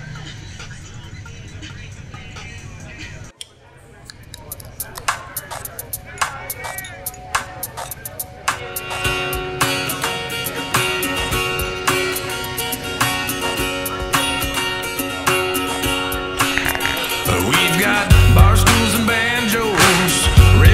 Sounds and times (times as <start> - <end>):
Music: 0.0 - 3.4, 4.4 - 20.7
Speech: 0.0 - 8.9.